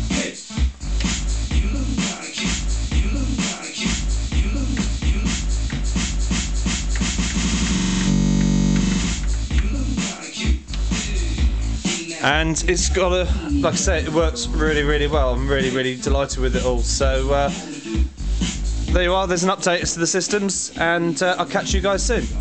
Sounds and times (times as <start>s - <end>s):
Music: 0.0s - 22.4s
Speech: 12.0s - 17.9s, 18.9s - 22.4s.